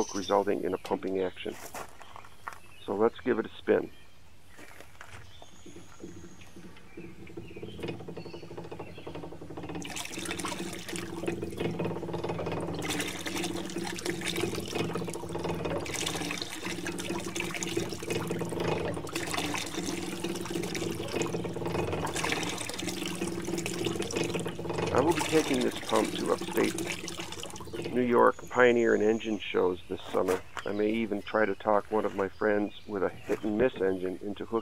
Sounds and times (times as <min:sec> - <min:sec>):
Water: 0:00.0 - 0:01.3, 0:02.8 - 0:34.6
Water tap, faucet: 0:09.6 - 0:28.1.